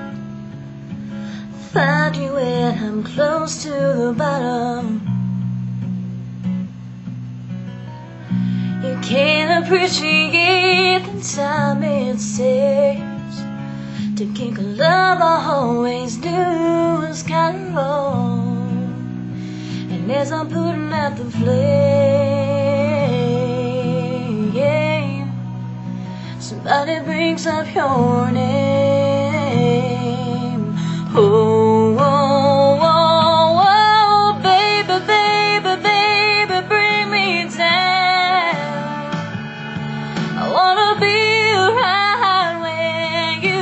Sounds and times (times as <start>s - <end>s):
Music: 0.0s - 43.6s
Female singing: 1.8s - 5.1s, 8.8s - 13.4s, 14.2s - 19.0s, 19.9s - 25.4s, 26.4s - 39.3s, 40.4s - 43.6s.